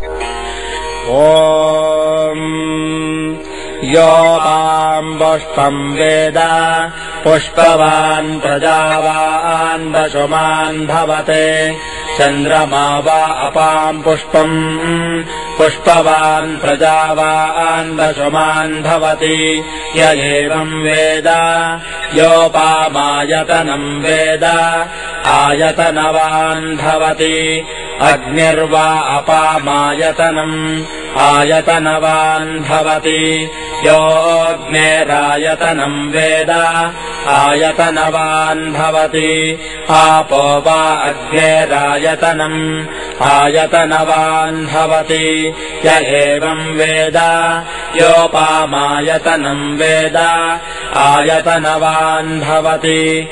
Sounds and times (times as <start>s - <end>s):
Mantra: 1.0s - 53.3s.